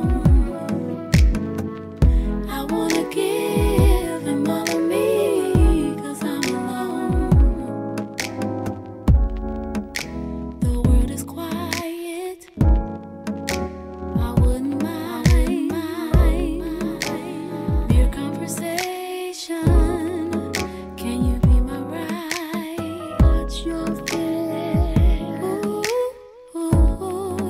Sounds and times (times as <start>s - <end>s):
Music: 0.0s - 27.5s.